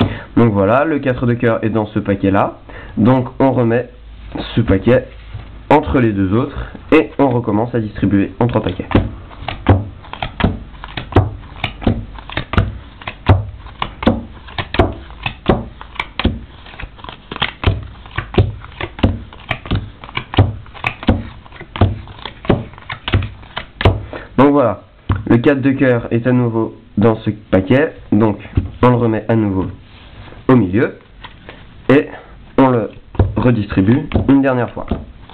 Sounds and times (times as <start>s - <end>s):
Speech: 0.4s - 5.1s, 5.7s - 9.0s, 24.4s - 29.8s, 30.5s - 31.0s, 31.9s - 35.0s.